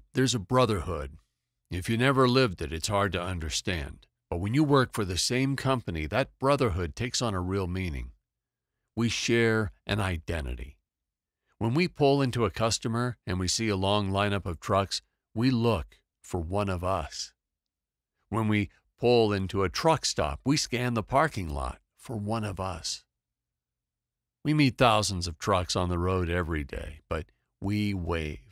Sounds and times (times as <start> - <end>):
Speech: 0.0 - 8.2, 9.0 - 10.8, 11.6 - 17.4, 18.3 - 23.1, 24.5 - 28.5.